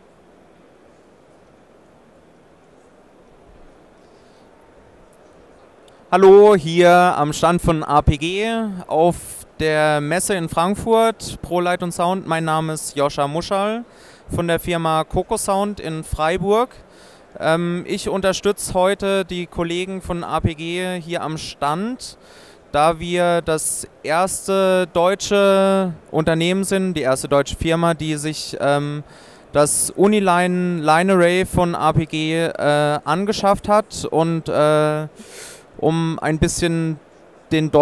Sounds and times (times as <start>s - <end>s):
Speech: 6.1s - 16.8s, 17.4s - 35.1s, 35.8s - 37.8s.